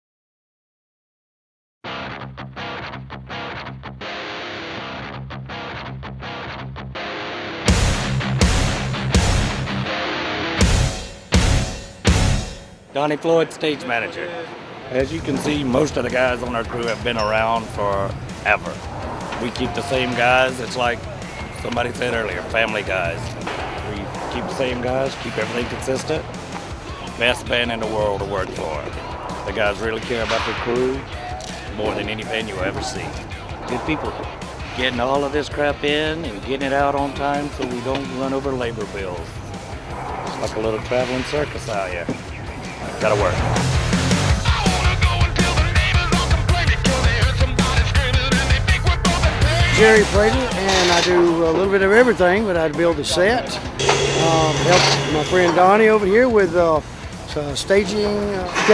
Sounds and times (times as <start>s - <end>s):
Music: 1.9s - 12.9s, 15.0s - 58.7s
Speech: 13.0s - 18.8s, 19.4s - 26.2s, 27.1s - 31.1s, 31.7s - 34.2s, 34.8s - 39.4s, 40.4s - 42.2s, 43.0s - 43.5s, 49.6s - 58.7s.